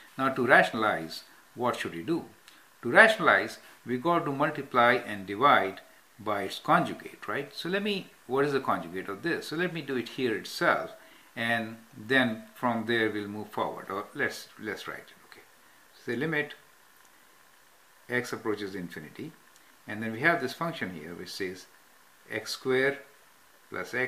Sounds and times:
Inside, small room: 0.0s - 24.0s
Speech: 0.2s - 16.6s, 18.1s - 23.1s, 23.7s - 24.0s.

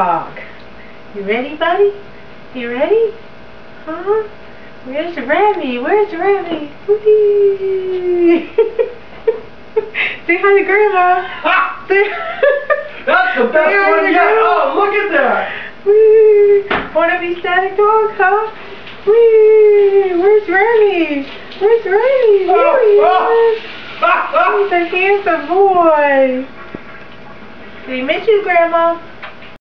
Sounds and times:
Speech: 1.2s - 2.0s, 3.9s - 4.3s, 4.9s - 8.4s, 13.1s - 26.5s, 27.9s - 29.1s.

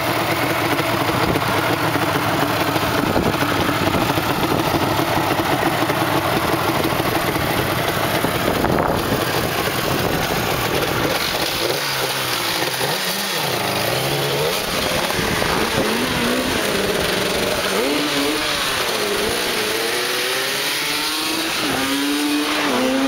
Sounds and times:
Medium engine (mid frequency): 0.0s - 23.0s
Motorcycle: 0.0s - 23.0s
Outside, urban or manmade: 0.0s - 23.0s.

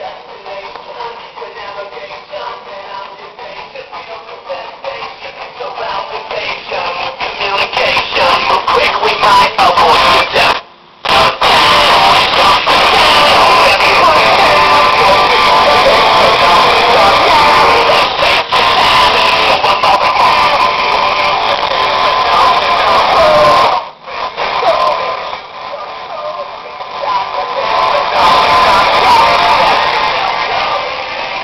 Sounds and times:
Music: 0.0s - 31.4s.

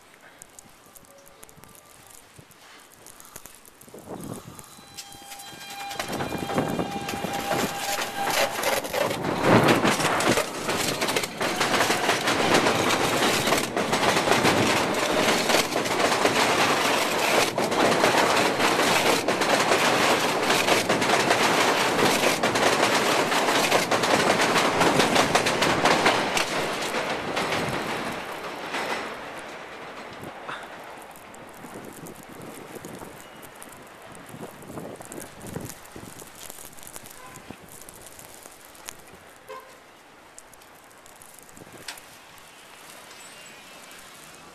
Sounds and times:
Rail transport: 0.0s - 44.5s.

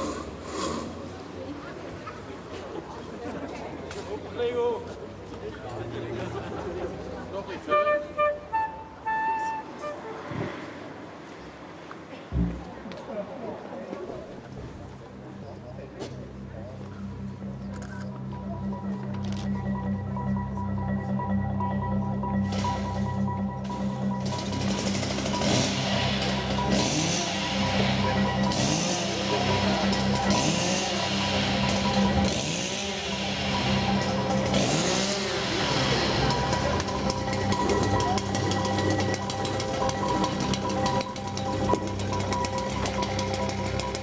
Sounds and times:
Speech: 12.1s - 17.0s.

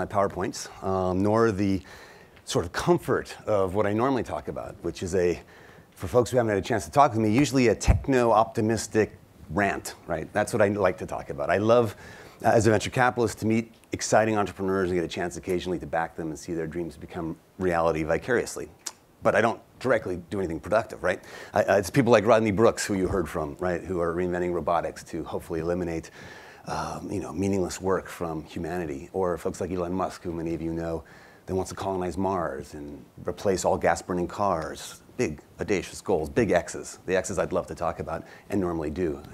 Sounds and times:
Speech: 0.0s - 39.3s.

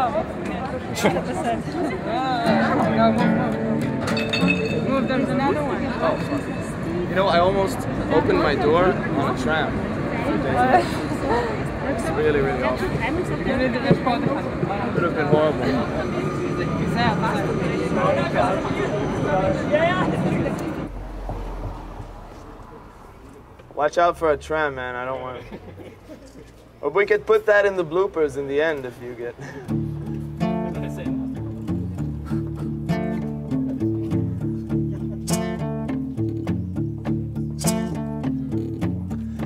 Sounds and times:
Music: 2.2s - 7.0s, 29.7s - 39.4s.

